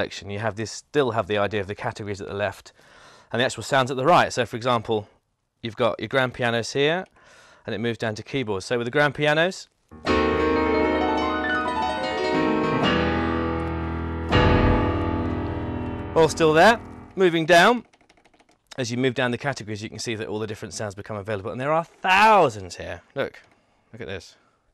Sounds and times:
Speech: 0.0s - 2.7s, 3.3s - 7.1s, 7.7s - 9.7s, 16.2s - 17.8s, 18.7s - 24.4s
Music: 10.0s - 17.2s.

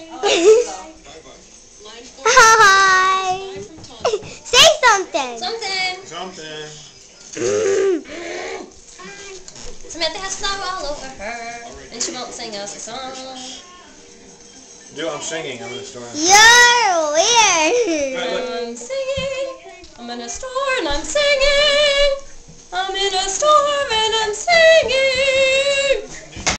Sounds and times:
Female singing: 9.9s - 13.6s, 18.1s - 26.2s.

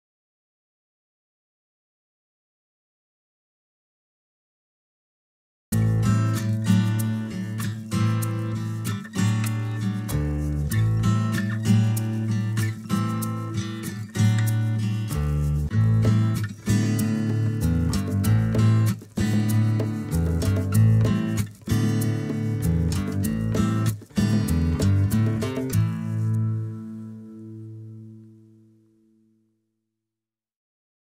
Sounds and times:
Music: 5.8s - 29.9s.

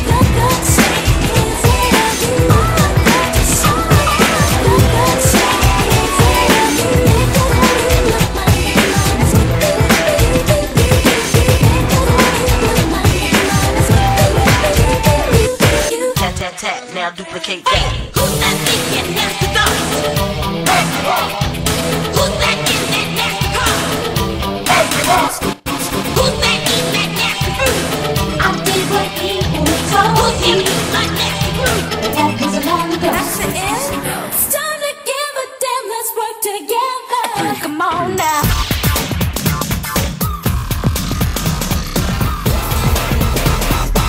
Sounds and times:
Pop music: 0.0s - 44.0s.

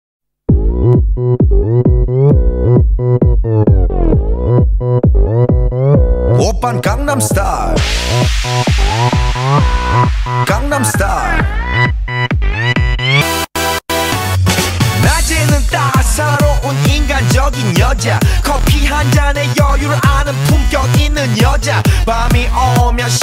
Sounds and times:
Music: 0.5s - 23.2s.

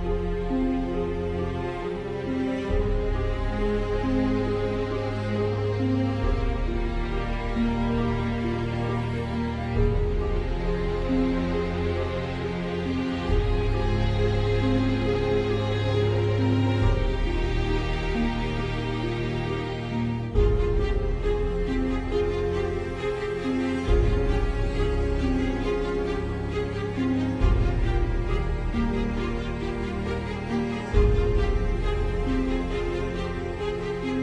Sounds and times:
Music: 0.0s - 34.2s.

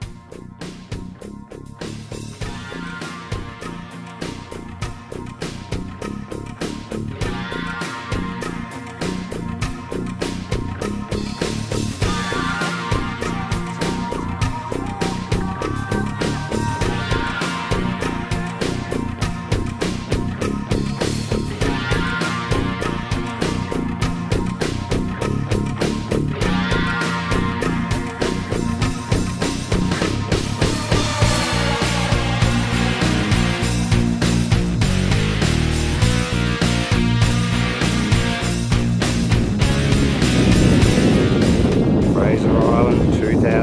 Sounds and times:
Music: 0.0s - 43.6s.

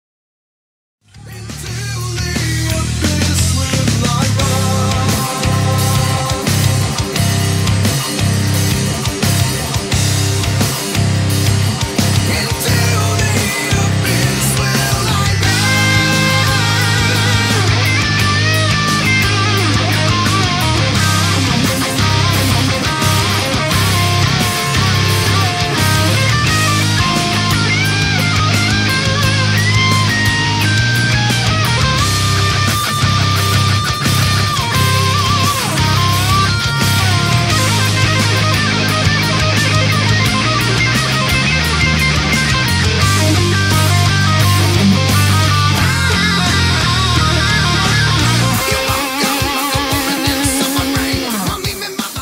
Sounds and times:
Strum: 1.1s - 49.2s.

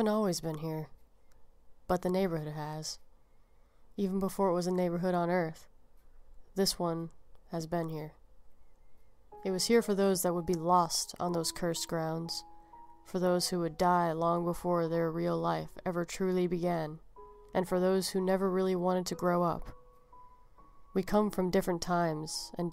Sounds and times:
Music: 9.3s - 22.7s.

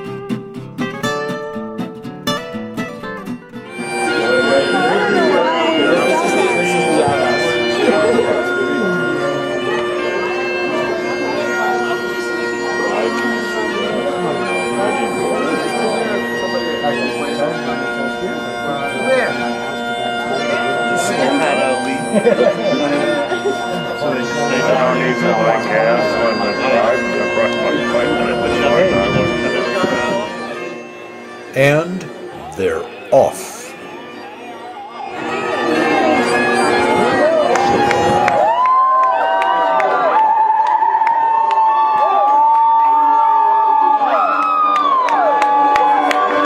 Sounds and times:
Music: 0.0s - 46.4s.

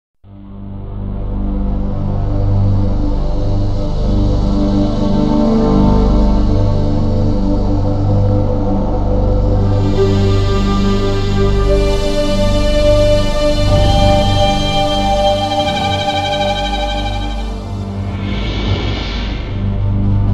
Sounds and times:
Soundtrack music: 9.5s - 18.1s.

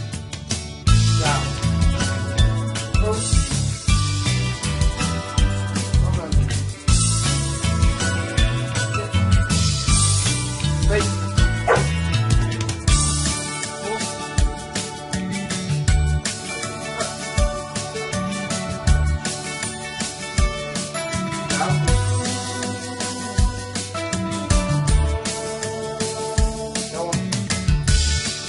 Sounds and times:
Music: 0.0s - 28.4s
Speech: 1.1s - 1.6s, 3.0s - 3.3s, 6.0s - 6.5s, 10.8s - 11.1s, 13.8s - 14.2s, 26.9s - 27.3s
Bow-wow: 11.6s - 12.0s.

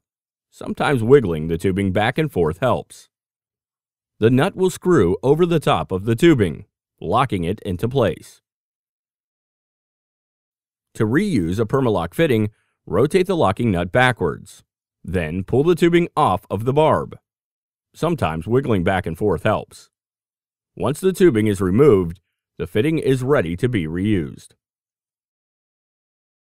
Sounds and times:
Speech: 0.6s - 3.1s, 4.2s - 8.4s, 11.0s - 17.2s, 18.0s - 19.9s, 20.8s - 24.6s.

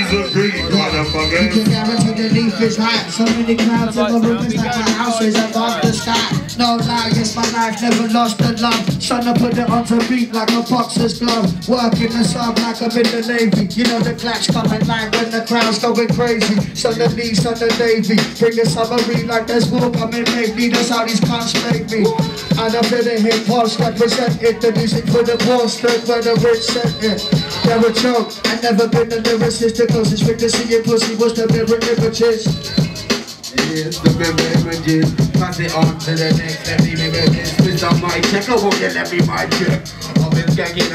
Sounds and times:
Music: 0.0s - 40.9s.

